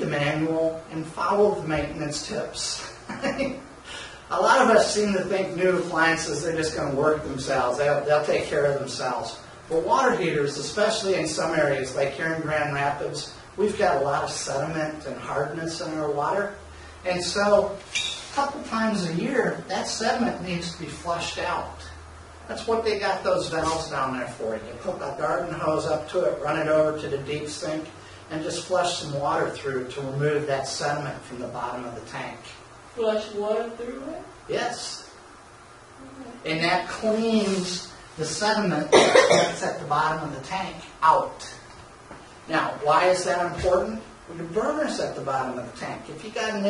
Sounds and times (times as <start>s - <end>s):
Speech: 0.0s - 3.0s, 4.3s - 35.2s, 36.0s - 41.7s, 42.5s - 46.6s.